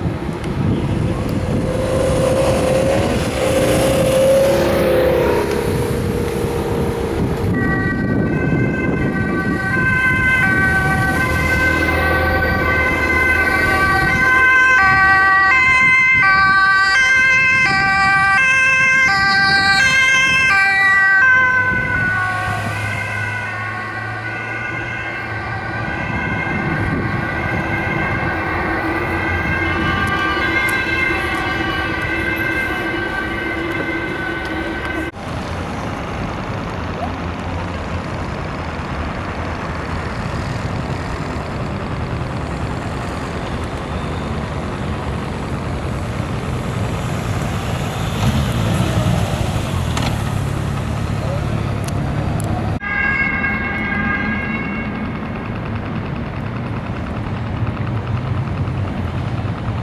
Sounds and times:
Motorcycle: 0:00.0 - 0:59.8.

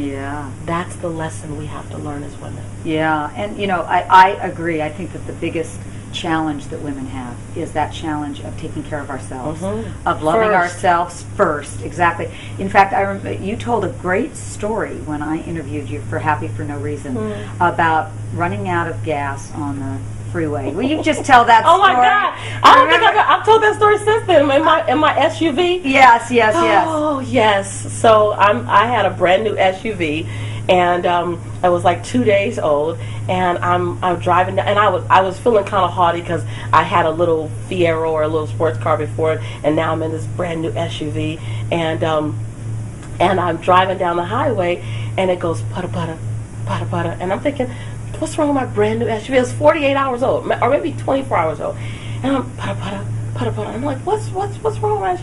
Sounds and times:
Speech: 0:00.0 - 0:42.4, 0:43.2 - 0:55.2.

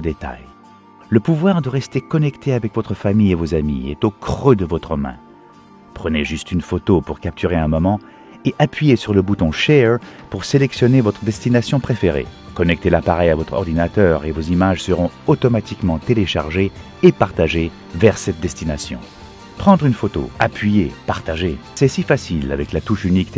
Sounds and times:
Speech: 0:00.0 - 0:05.2, 0:06.0 - 0:23.3
Music: 0:00.0 - 0:23.3.

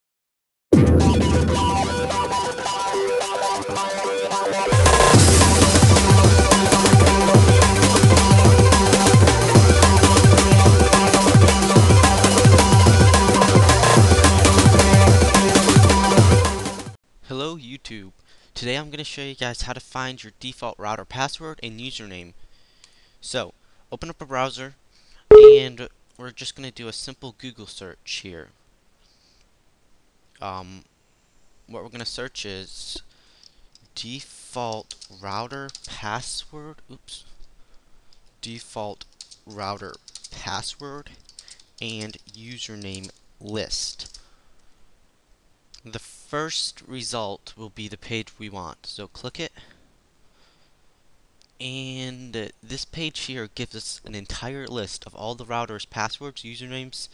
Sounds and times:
Drum and bass: 0:04.7 - 0:16.8.

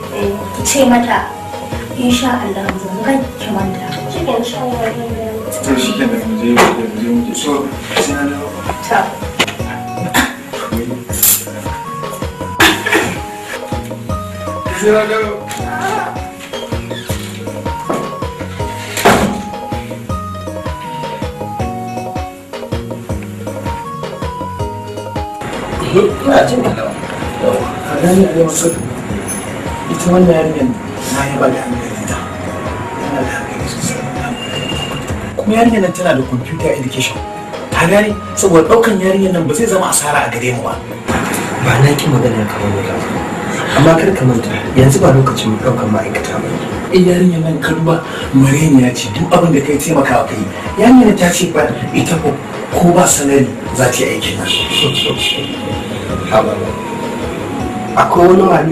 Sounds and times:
Music: 0:00.0 - 0:58.7.

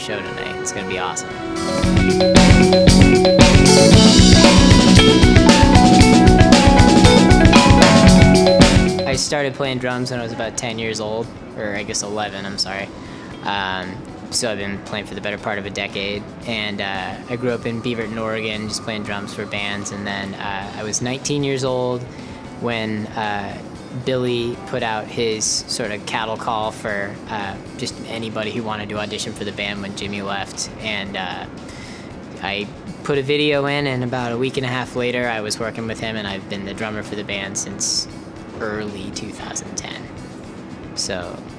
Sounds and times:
Speech: 0:00.0 - 0:01.3, 0:09.1 - 0:31.5, 0:32.4 - 0:40.1, 0:41.0 - 0:41.5
Music: 0:00.0 - 0:41.5.

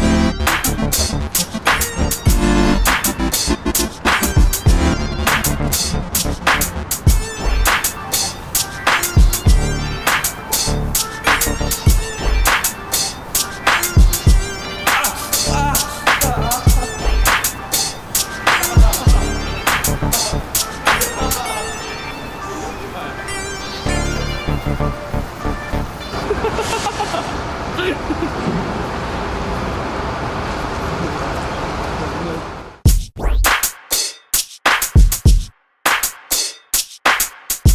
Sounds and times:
Music: 0:00.0 - 0:26.2, 0:32.9 - 0:37.7
Speech: 0:31.0 - 0:32.6.

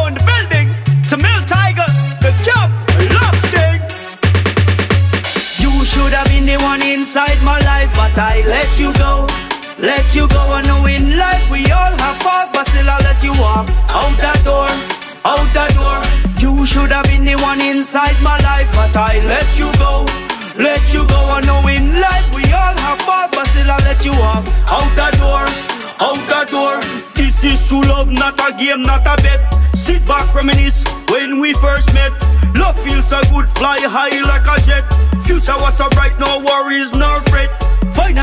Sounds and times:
Rhythm and blues: 0:00.0 - 0:38.2.

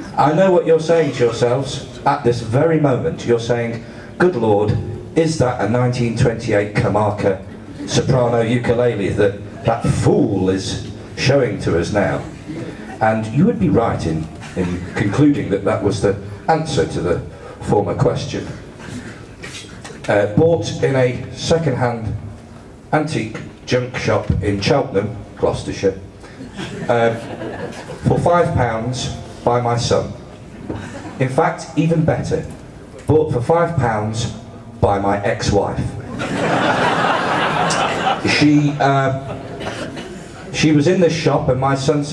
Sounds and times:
Speech: 0:00.0 - 0:18.6, 0:20.0 - 0:22.3, 0:22.9 - 0:26.1, 0:26.8 - 0:27.3, 0:28.0 - 0:30.3, 0:31.2 - 0:36.0, 0:38.2 - 0:39.4, 0:40.5 - 0:42.1.

